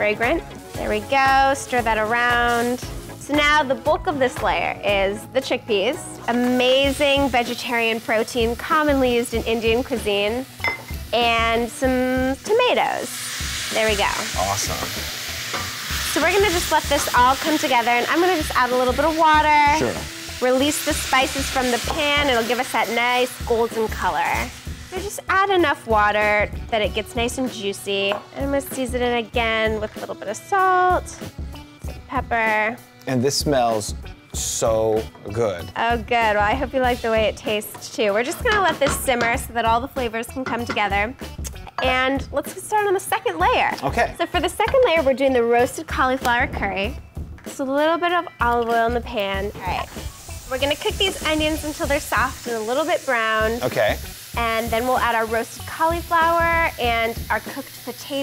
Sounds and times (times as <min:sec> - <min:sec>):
Music: 0:00.0 - 0:58.2
Speech: 0:19.6 - 0:20.0, 0:43.8 - 0:44.2.